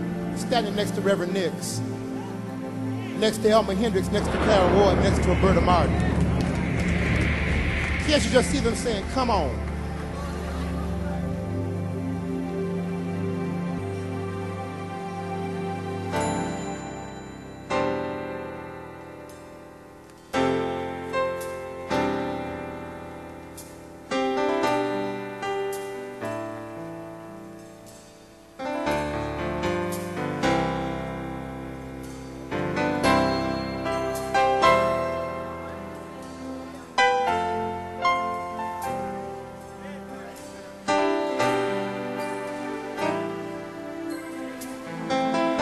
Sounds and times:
Music: 0:00.0 - 0:45.6.

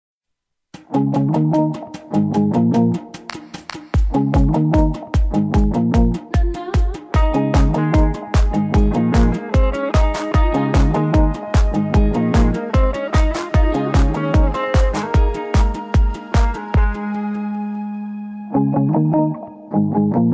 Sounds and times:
Bass guitar: 0:00.8 - 0:20.3.

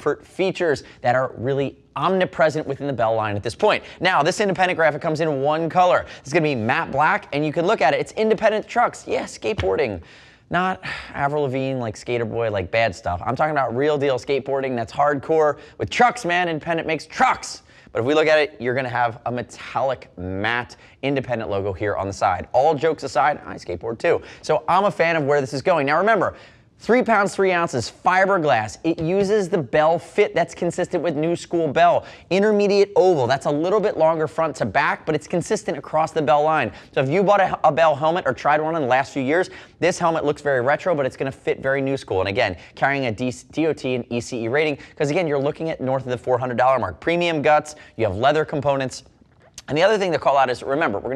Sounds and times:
Speech: 0:00.0 - 0:51.1.

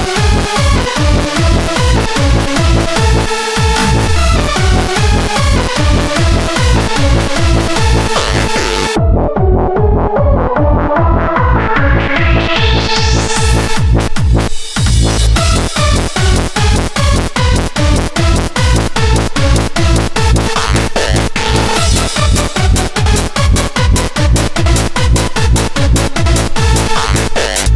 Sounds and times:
Techno: 0:00.0 - 0:27.7.

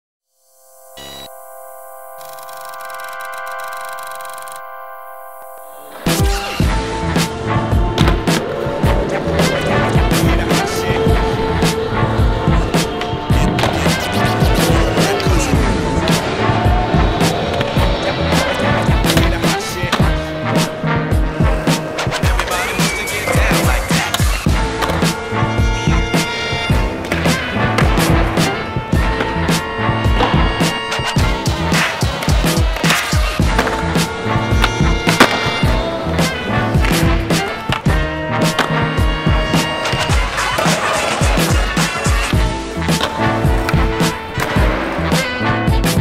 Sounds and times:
Music: 0:00.3 - 0:46.0.

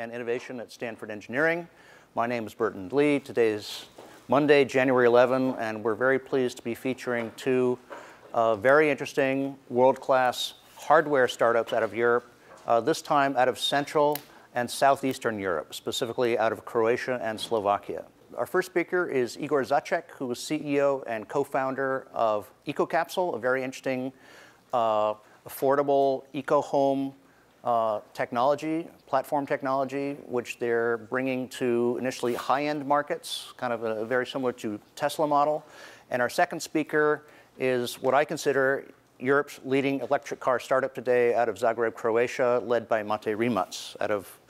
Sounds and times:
Speech: 0:00.0 - 0:44.4.

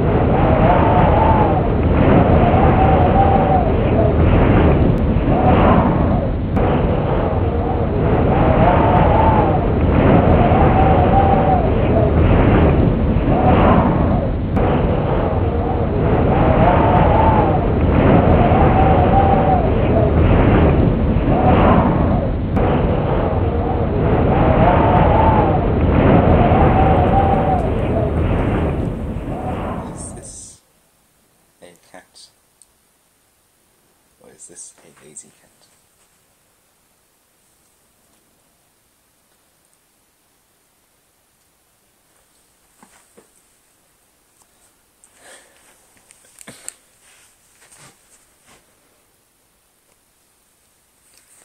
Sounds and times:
Speech: 0:29.7 - 0:30.6, 0:31.6 - 0:32.4, 0:34.2 - 0:35.7.

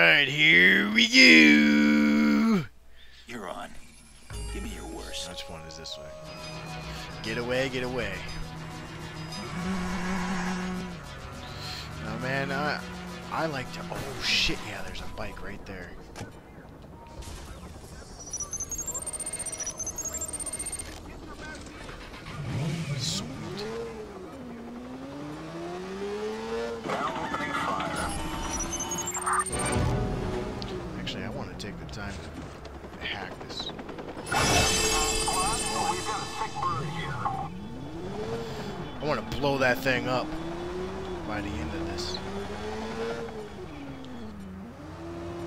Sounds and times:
Helicopter: 0:31.4 - 0:38.7.

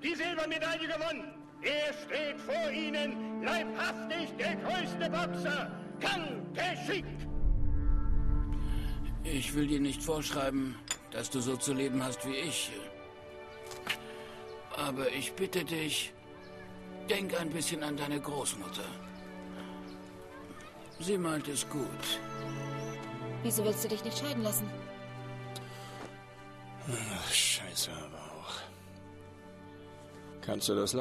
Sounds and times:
Music: 0:00.0 - 0:31.0.

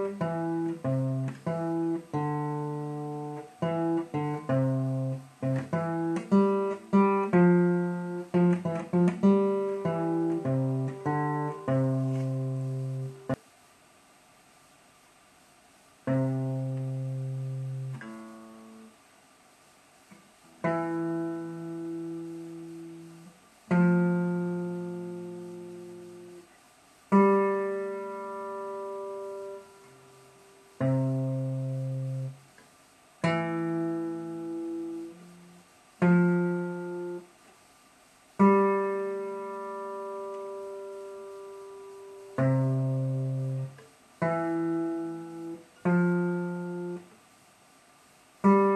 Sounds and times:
Acoustic guitar: 0:00.0 - 0:13.4, 0:16.0 - 0:19.0, 0:20.0 - 0:37.6, 0:38.4 - 0:47.2, 0:48.4 - 0:48.7.

